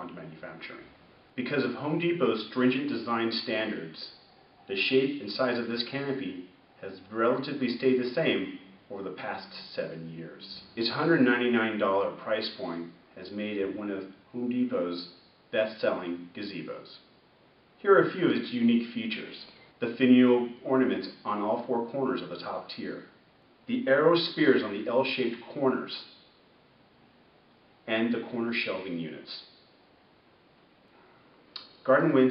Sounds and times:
Speech: 0:00.0 - 0:17.1, 0:17.8 - 0:26.2, 0:27.8 - 0:29.5, 0:31.8 - 0:32.3.

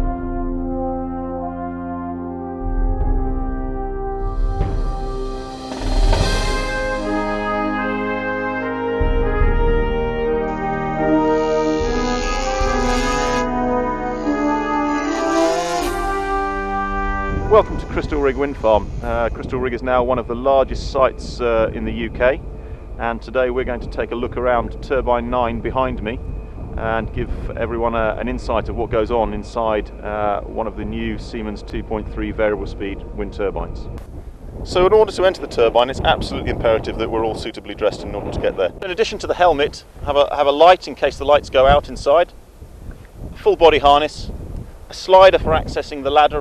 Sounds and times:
Wind noise (microphone): 0:17.1 - 0:29.6, 0:30.8 - 0:46.4.

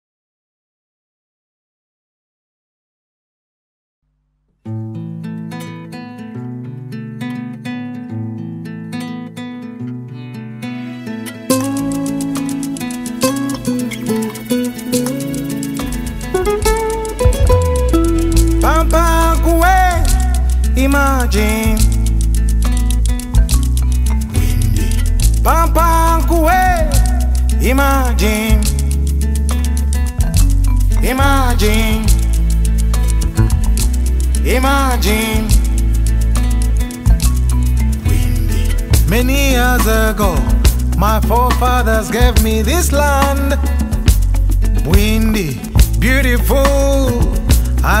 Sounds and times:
Happy music: 0:10.8 - 0:48.0
Jazz: 0:11.5 - 0:48.0.

